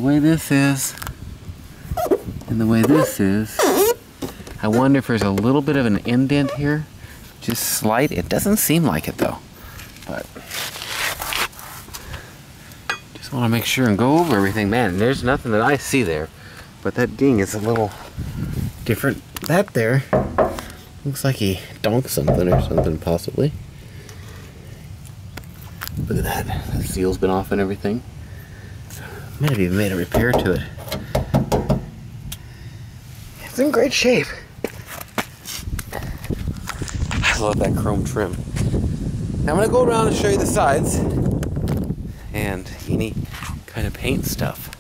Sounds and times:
Speech: 0:00.0 - 0:01.0, 0:02.5 - 0:03.6, 0:04.6 - 0:09.4, 0:10.0 - 0:10.4, 0:13.2 - 0:18.0, 0:18.8 - 0:20.1, 0:21.0 - 0:23.6, 0:26.1 - 0:28.0, 0:29.4 - 0:30.8, 0:33.4 - 0:34.5, 0:37.2 - 0:38.4, 0:39.5 - 0:41.1, 0:42.3 - 0:44.8.

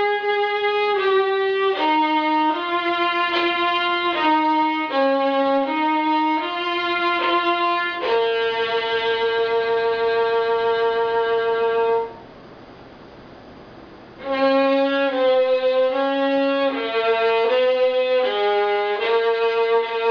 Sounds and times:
Violin, fiddle: 0:00.0 - 0:12.2, 0:14.2 - 0:20.1.

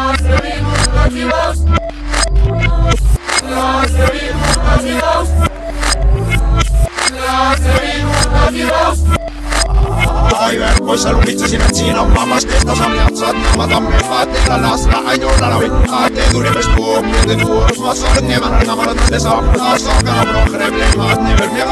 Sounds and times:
Music: 0:00.0 - 0:21.7
Sound effect: 0:00.1 - 0:21.7.

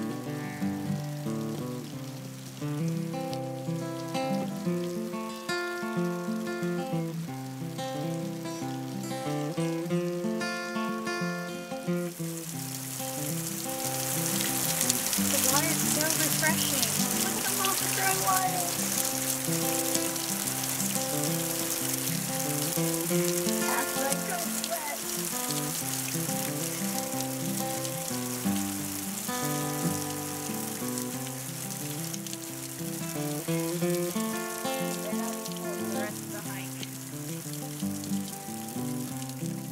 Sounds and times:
Frying (food): 0:00.0 - 0:39.7
Sizzle: 0:00.0 - 0:39.7.

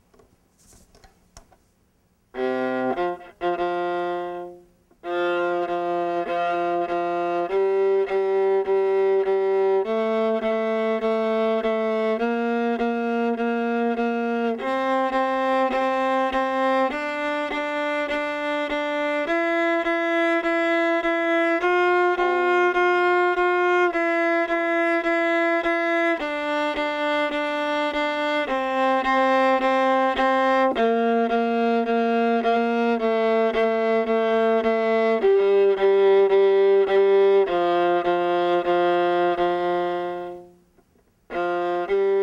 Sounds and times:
Classical music: 0:02.3 - 0:42.2
Violin, fiddle: 0:02.3 - 0:42.2.

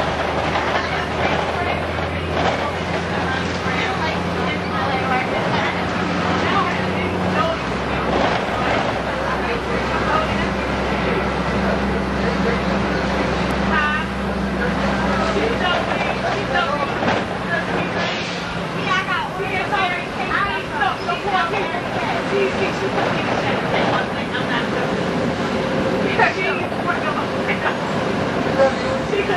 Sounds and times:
Vehicle: 0:00.0 - 0:29.3
Speech: 0:00.4 - 0:25.0, 0:26.0 - 0:29.3.

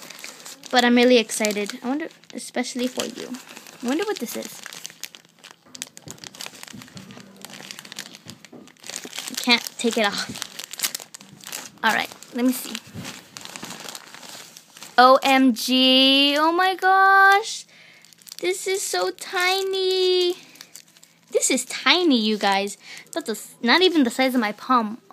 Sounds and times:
Crumpling, crinkling: 0:00.0 - 0:15.3, 0:17.2 - 0:24.6
Inside, small room: 0:00.0 - 0:25.1
Speech: 0:00.7 - 0:04.6, 0:11.8 - 0:12.8, 0:15.0 - 0:17.6, 0:18.4 - 0:20.4, 0:21.3 - 0:25.1.

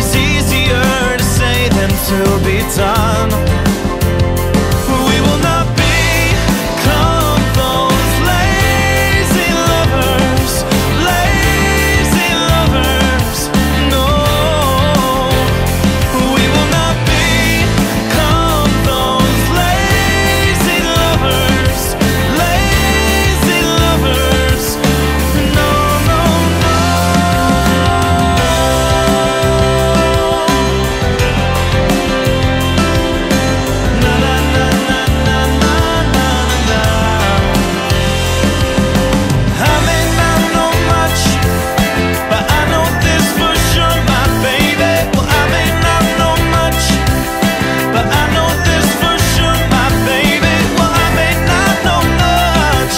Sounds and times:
Singing: 0:00.0 - 0:04.1, 0:04.7 - 0:32.1, 0:33.9 - 0:38.3, 0:39.5 - 0:52.9.

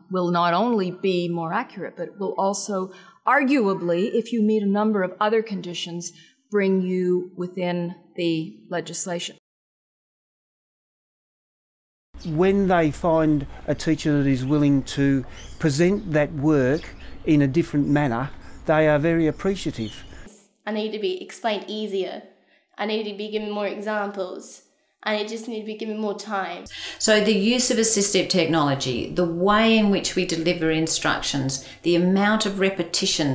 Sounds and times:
Speech: 0:00.1 - 0:09.4, 0:12.3 - 0:20.0, 0:20.7 - 0:22.2, 0:22.8 - 0:33.3.

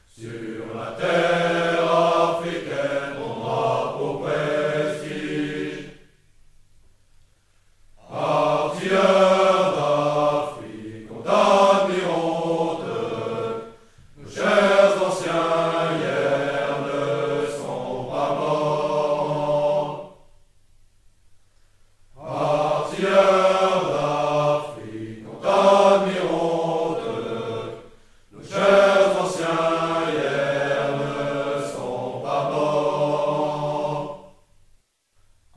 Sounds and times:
Mantra: 0:00.1 - 0:06.1, 0:08.0 - 0:20.2, 0:22.2 - 0:34.4.

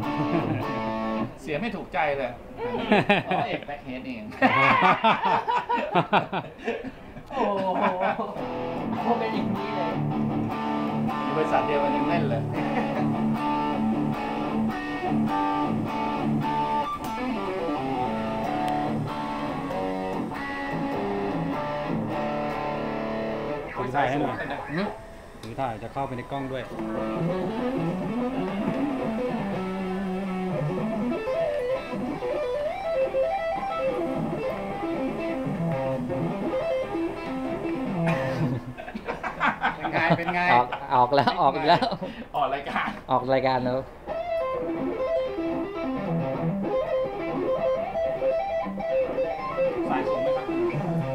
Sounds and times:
Music: 0:00.0 - 0:01.4, 0:08.2 - 0:25.4, 0:26.2 - 0:38.6, 0:44.1 - 0:51.1
Speech: 0:01.4 - 0:02.8, 0:09.0 - 0:10.0, 0:11.3 - 0:12.6, 0:23.8 - 0:27.0, 0:39.8 - 0:43.9, 0:49.9 - 0:51.0.

